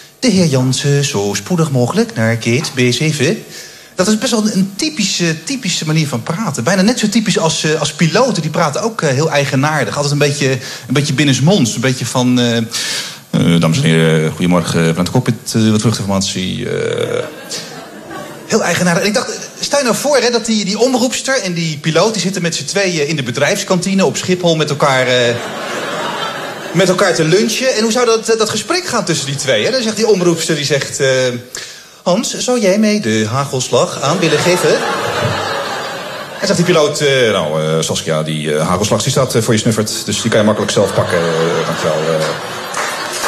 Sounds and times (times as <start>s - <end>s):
Speech: 0.2s - 17.6s, 18.5s - 25.5s, 26.7s - 35.0s, 36.4s - 42.4s.